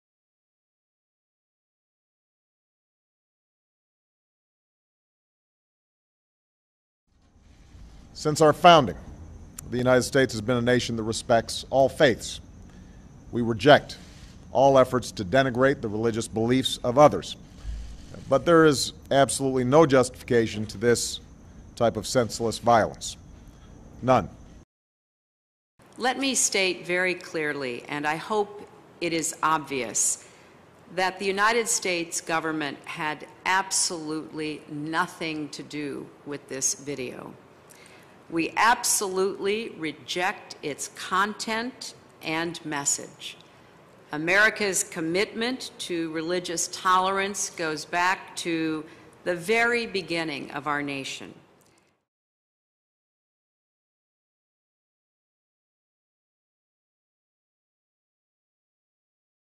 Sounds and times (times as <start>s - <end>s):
Narration, monologue: 7.2s - 24.7s, 25.8s - 52.1s
Female speech, woman speaking: 26.0s - 30.2s, 30.9s - 37.4s, 38.3s - 43.4s, 44.1s - 51.4s.